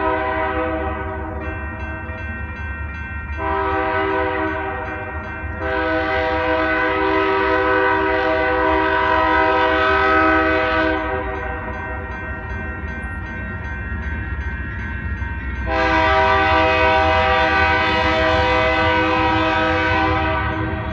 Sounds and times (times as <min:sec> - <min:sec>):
Train horn: 0:00.0 - 0:01.5, 0:03.4 - 0:11.6, 0:15.6 - 0:20.9.